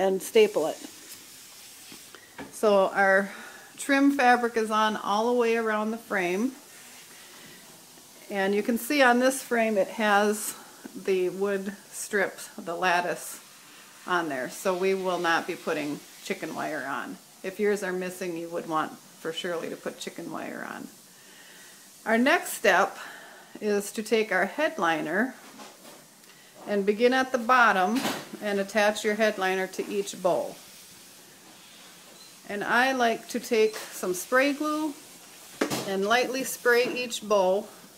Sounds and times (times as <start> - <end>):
Speech: 0.0 - 0.9, 2.6 - 6.6, 8.3 - 13.4, 14.1 - 20.9, 22.1 - 23.0, 23.6 - 25.4, 26.7 - 30.6, 32.5 - 35.0, 35.8 - 37.7
Inside, small room: 0.0 - 37.9.